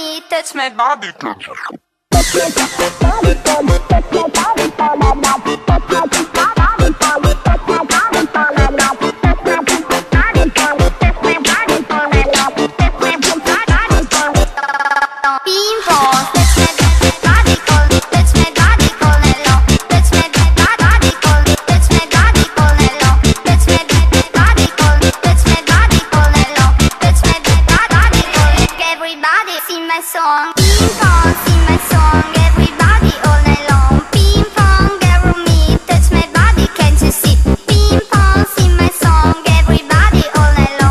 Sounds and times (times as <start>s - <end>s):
Music: 2.1s - 14.6s, 15.5s - 29.2s, 30.5s - 40.9s.